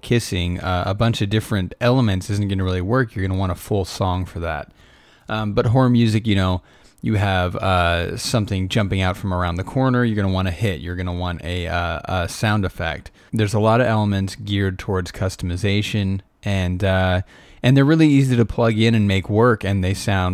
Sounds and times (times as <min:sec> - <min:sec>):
Speech: 0:00.0 - 0:04.7, 0:05.3 - 0:20.3.